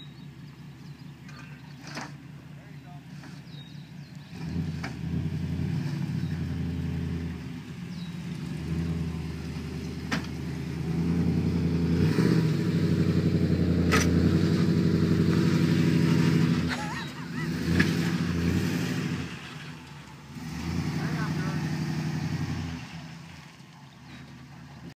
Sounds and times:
Car: 0:00.0 - 0:24.9
Speech: 0:01.2 - 0:01.8, 0:02.4 - 0:03.2, 0:20.9 - 0:21.7.

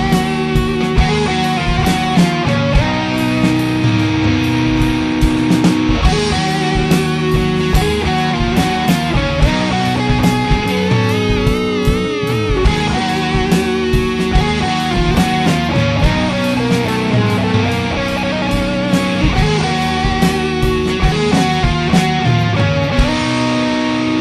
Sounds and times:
Heavy metal: 0:00.0 - 0:24.2
Steel guitar, slide guitar: 0:00.0 - 0:24.2.

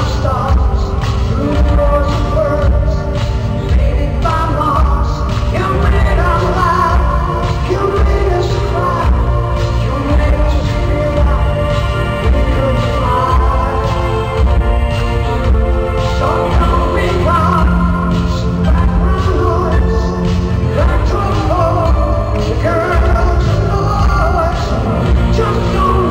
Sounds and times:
Music: 0:00.0 - 0:26.1.

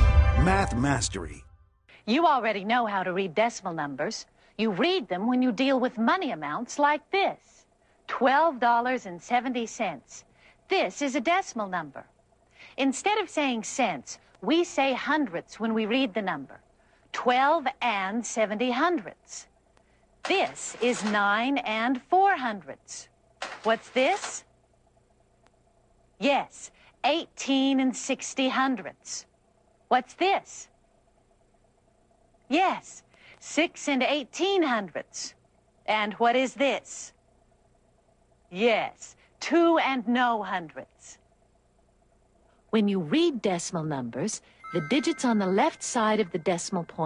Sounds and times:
Speech: 0:00.4 - 0:01.4, 0:02.0 - 0:12.1, 0:12.8 - 0:16.6, 0:17.2 - 0:19.5, 0:20.3 - 0:23.1, 0:23.7 - 0:24.4, 0:26.2 - 0:29.3, 0:29.9 - 0:30.7, 0:32.5 - 0:37.2, 0:38.5 - 0:41.2, 0:42.8 - 0:47.0.

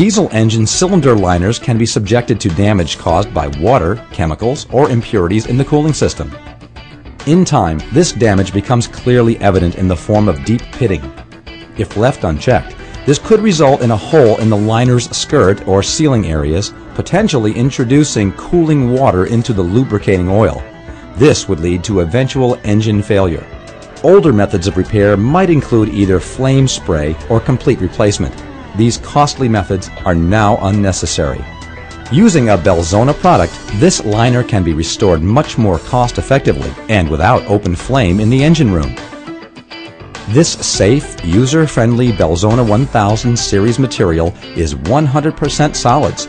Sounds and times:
Speech: 0:00.0 - 0:06.4, 0:07.2 - 0:11.1, 0:11.8 - 0:31.4, 0:32.1 - 0:39.0, 0:40.3 - 0:46.2
Music: 0:00.0 - 0:46.2.

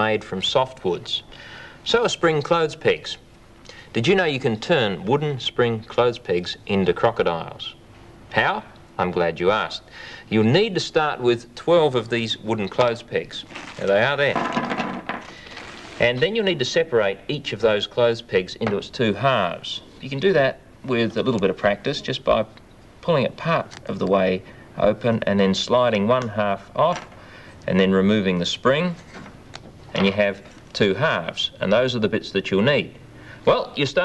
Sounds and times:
Speech: 0:00.0 - 0:03.2, 0:03.9 - 0:14.4, 0:16.0 - 0:29.1, 0:29.9 - 0:34.0
Inside, small room: 0:00.0 - 0:34.0
Wood: 0:13.6 - 0:16.0.

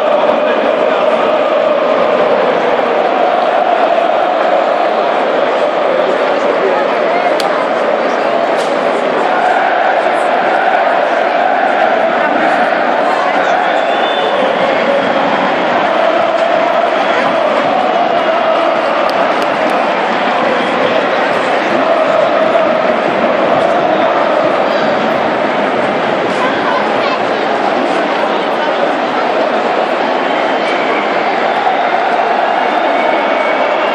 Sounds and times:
Speech: 0:00.0 - 0:33.9.

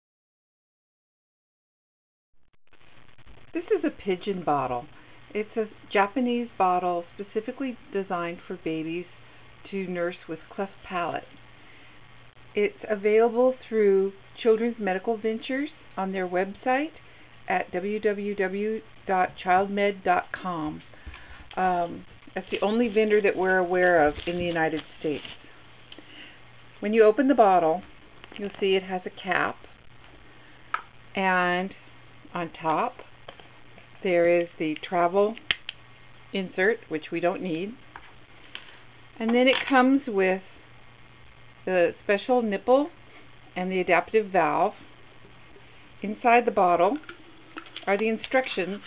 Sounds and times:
Speech: 0:03.6 - 0:11.3, 0:12.6 - 0:20.9, 0:21.6 - 0:25.4, 0:26.8 - 0:29.6, 0:31.2 - 0:33.0, 0:34.0 - 0:35.4, 0:36.3 - 0:37.8, 0:39.2 - 0:40.5, 0:41.7 - 0:43.0, 0:43.6 - 0:44.8, 0:46.0 - 0:47.0, 0:47.8 - 0:48.8.

